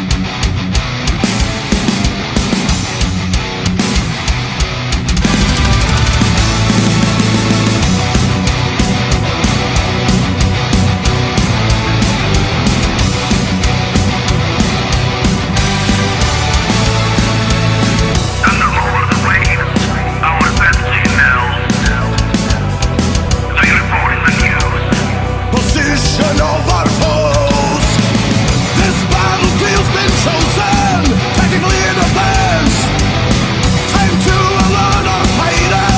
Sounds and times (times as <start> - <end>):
Music: 0.0 - 35.9.